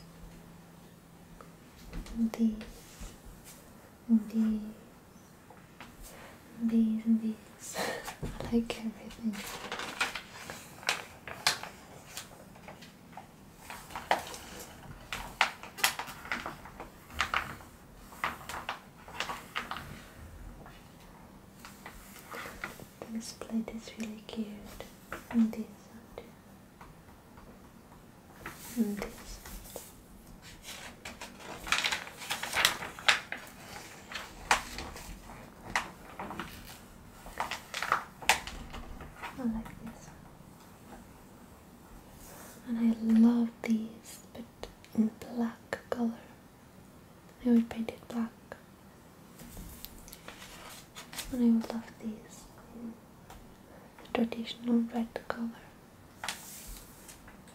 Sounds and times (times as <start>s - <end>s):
Inside, small room: 0.0s - 57.5s.